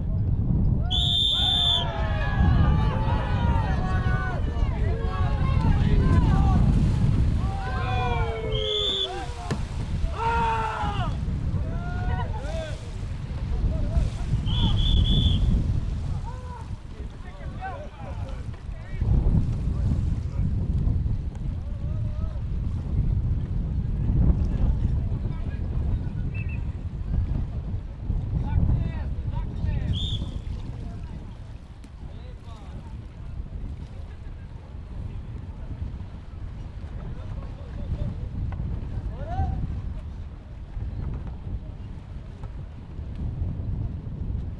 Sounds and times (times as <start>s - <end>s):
Rowboat, canoe, kayak: 0.0s - 44.6s
Wind noise (microphone): 0.0s - 44.6s.